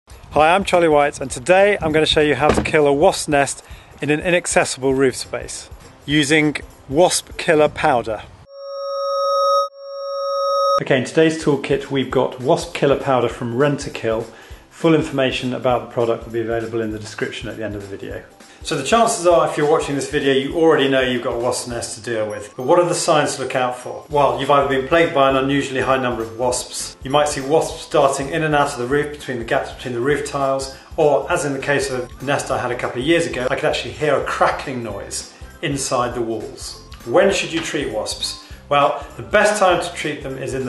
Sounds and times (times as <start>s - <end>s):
Music: 0.1s - 8.2s, 10.9s - 40.6s
Speech: 0.3s - 8.3s, 10.8s - 40.6s.